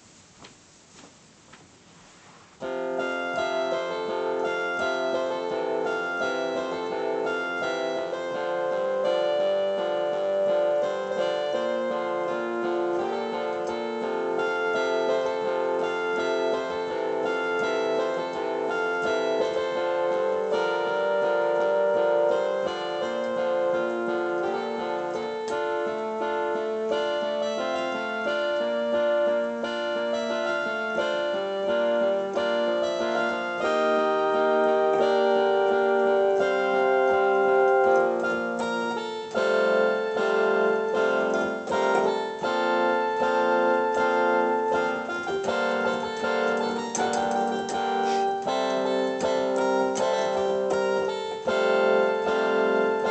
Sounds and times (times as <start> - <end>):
Piano: 1.6 - 53.1
Classical music: 2.6 - 53.1.